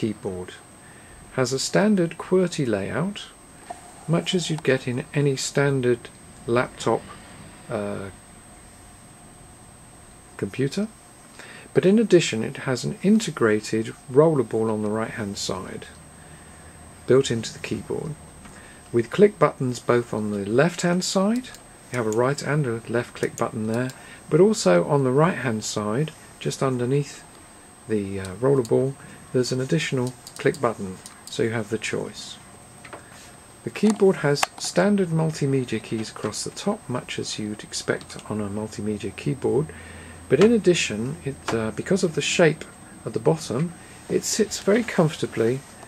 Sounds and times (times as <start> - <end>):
Speech: 0.0 - 0.7, 1.3 - 3.4, 4.1 - 8.2, 10.4 - 11.0, 11.7 - 16.0, 17.1 - 18.2, 18.9 - 27.3, 27.9 - 32.4, 33.6 - 39.7, 40.3 - 45.7.